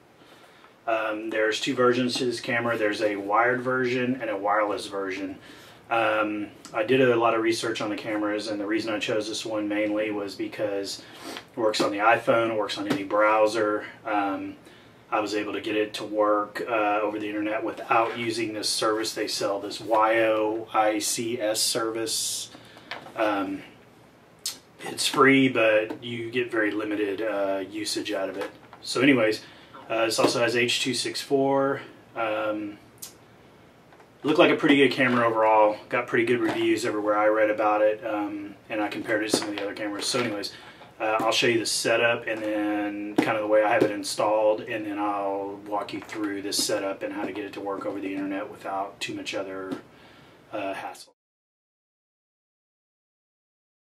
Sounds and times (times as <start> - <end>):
Speech: 0.9 - 11.0, 11.6 - 22.6, 23.2 - 23.8, 24.5 - 33.2, 34.2 - 49.9, 50.5 - 51.2.